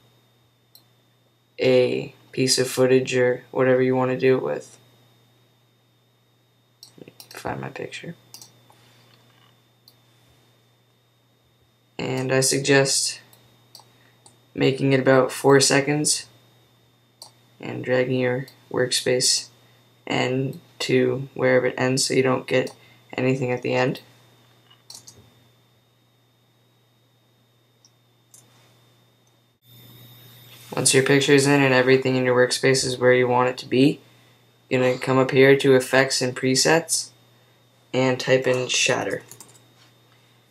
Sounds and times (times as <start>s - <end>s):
Clicking: 0.7s - 0.9s, 8.3s - 8.6s, 13.3s - 14.4s, 24.9s - 25.2s, 39.3s - 39.6s
Speech: 1.6s - 4.8s, 7.0s - 8.2s, 12.0s - 13.3s, 14.6s - 16.4s, 17.6s - 24.1s, 30.7s - 34.0s, 34.7s - 37.2s, 38.0s - 39.4s.